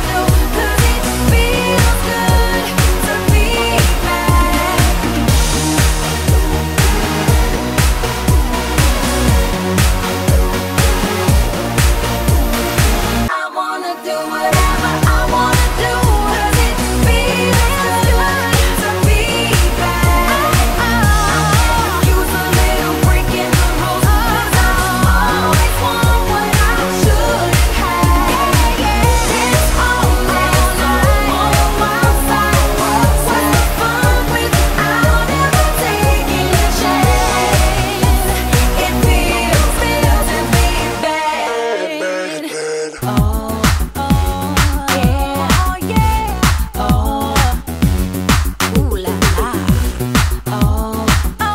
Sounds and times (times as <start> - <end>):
Music: 0.0 - 42.4, 43.0 - 51.5.